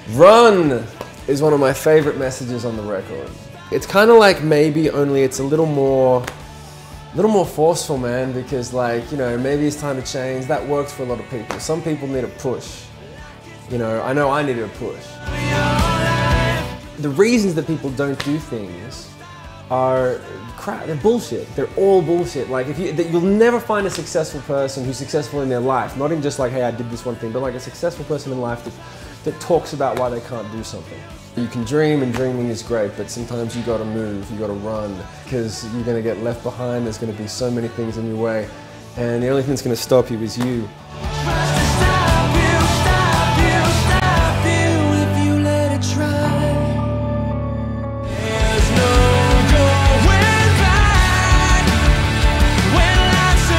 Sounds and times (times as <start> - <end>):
Speech: 0.0 - 6.3, 7.1 - 12.9, 13.7 - 15.2, 17.0 - 40.7
Music: 0.0 - 53.5.